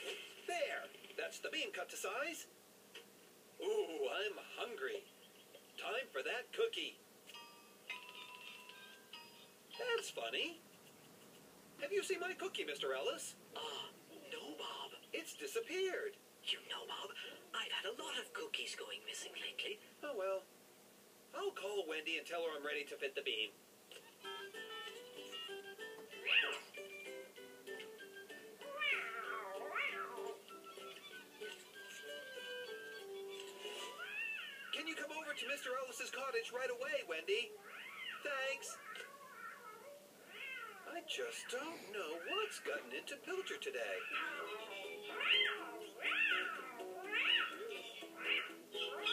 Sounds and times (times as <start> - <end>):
Inside, small room: 0.0 - 49.1
Music: 7.3 - 10.1, 23.9 - 34.0, 44.1 - 49.1.